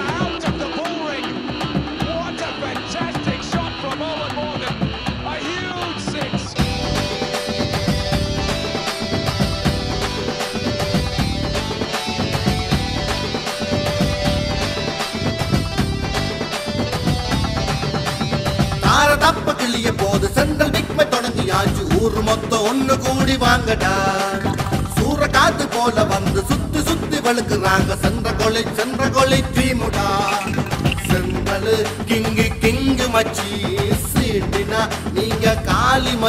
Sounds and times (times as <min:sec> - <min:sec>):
Music: 0:00.0 - 0:36.2.